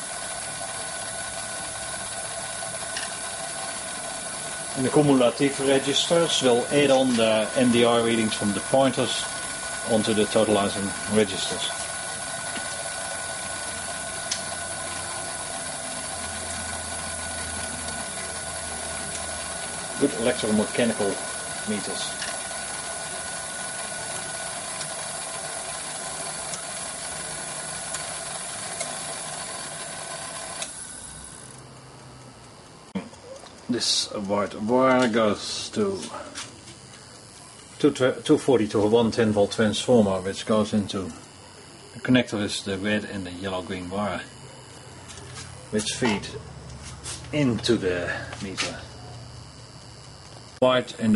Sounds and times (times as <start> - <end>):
Speech: 4.8 - 11.8, 20.0 - 22.2, 33.7 - 36.4, 37.8 - 41.2, 42.0 - 44.3, 45.7 - 46.4, 47.3 - 48.9, 50.6 - 51.1.